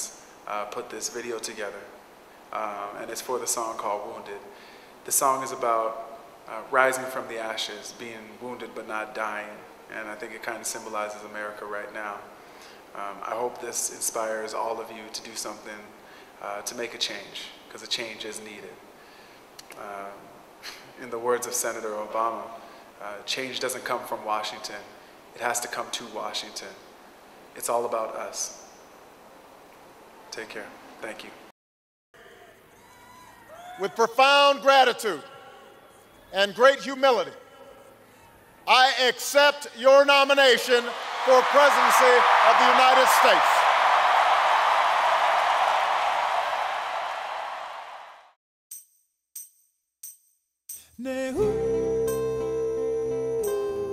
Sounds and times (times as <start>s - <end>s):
Male speech, man speaking: 0.0s - 1.9s, 2.6s - 4.5s, 5.1s - 12.3s, 13.0s - 18.8s, 19.8s - 20.2s, 21.0s - 26.8s, 27.6s - 28.6s, 30.3s - 31.4s, 33.8s - 35.4s, 36.3s - 37.4s, 38.7s - 43.6s
Narration, monologue: 0.0s - 31.5s, 33.8s - 43.7s.